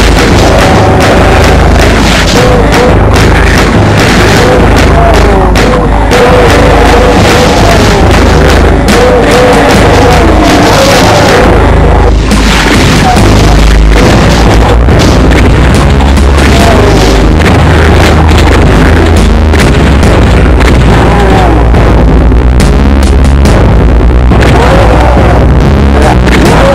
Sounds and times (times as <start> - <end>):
Speech: 8.8 - 12.0, 16.4 - 17.1, 24.5 - 26.7.